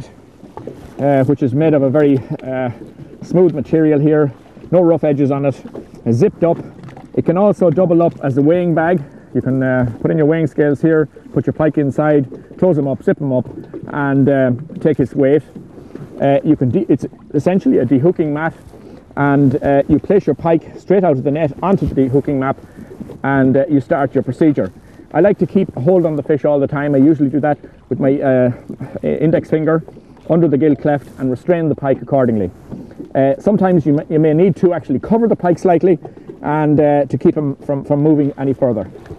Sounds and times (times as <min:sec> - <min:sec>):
Speech: 0:01.0 - 0:06.6, 0:07.2 - 0:15.5, 0:16.2 - 0:18.6, 0:19.2 - 0:22.6, 0:23.2 - 0:32.5, 0:33.2 - 0:38.9.